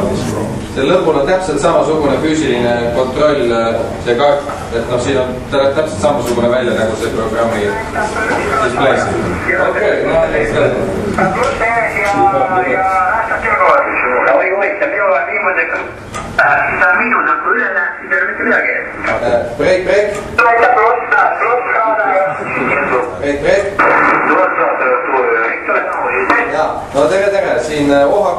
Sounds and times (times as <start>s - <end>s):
Speech: 0.0s - 28.3s
Radio: 7.7s - 9.9s, 11.2s - 19.1s, 20.4s - 23.1s, 23.8s - 26.6s.